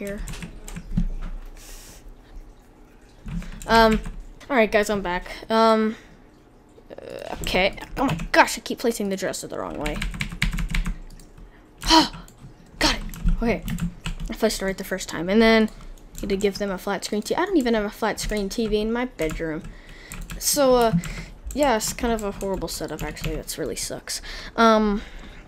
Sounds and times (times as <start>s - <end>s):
Typing: 9.8s - 11.3s.